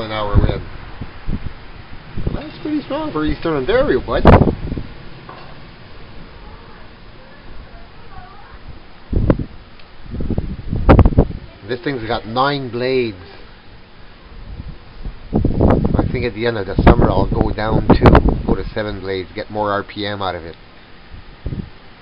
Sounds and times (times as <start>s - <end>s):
Wind: 0.0s - 22.0s
Speech: 2.3s - 4.3s, 16.0s - 20.6s.